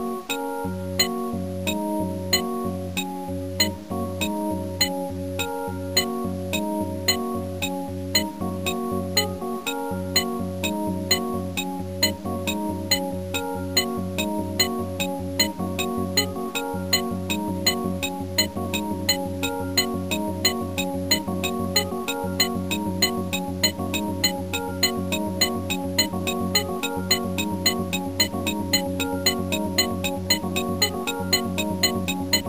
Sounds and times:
Video game music: 0.3s - 32.4s.

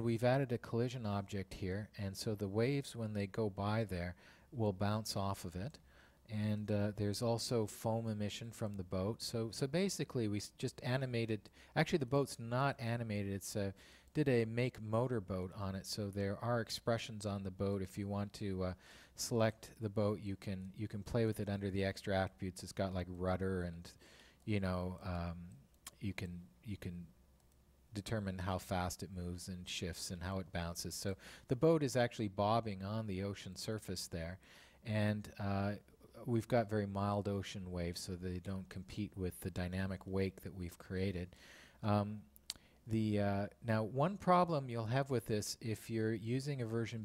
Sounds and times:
Speech: 0.0s - 27.2s, 27.9s - 42.3s, 42.9s - 47.0s.

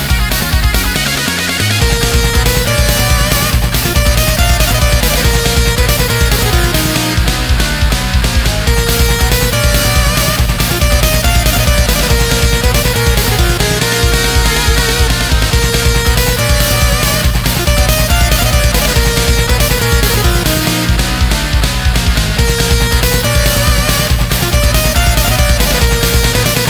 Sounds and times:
Exciting music: 0.0s - 26.6s
Soundtrack music: 0.0s - 26.6s.

